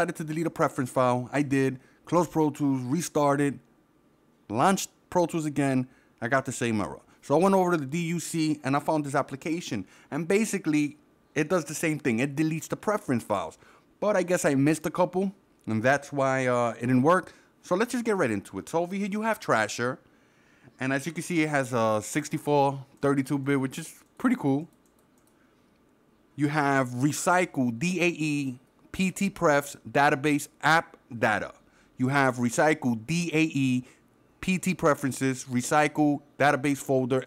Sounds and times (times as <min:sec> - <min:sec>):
Speech: 0:00.0 - 0:03.6, 0:04.5 - 0:20.0, 0:20.8 - 0:24.7, 0:26.4 - 0:37.2.